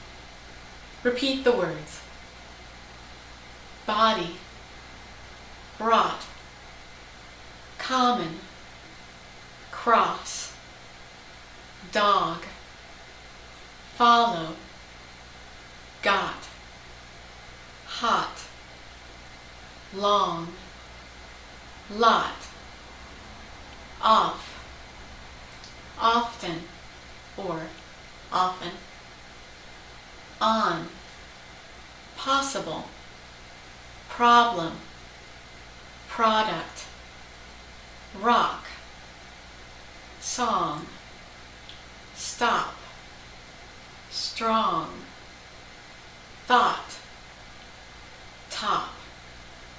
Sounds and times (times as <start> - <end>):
Speech: 1.0 - 2.1, 3.8 - 4.4, 5.8 - 6.4, 7.8 - 8.5, 9.7 - 10.6, 11.8 - 12.6, 13.9 - 14.7, 16.0 - 16.6, 17.9 - 18.6, 19.9 - 20.7, 21.9 - 22.6, 24.0 - 24.6, 26.0 - 26.7, 27.4 - 28.9, 30.4 - 31.0, 32.2 - 33.0, 34.1 - 34.9, 36.1 - 37.0, 38.1 - 38.8, 40.2 - 41.0, 42.2 - 42.9, 44.1 - 45.1, 46.4 - 47.1, 48.5 - 49.1.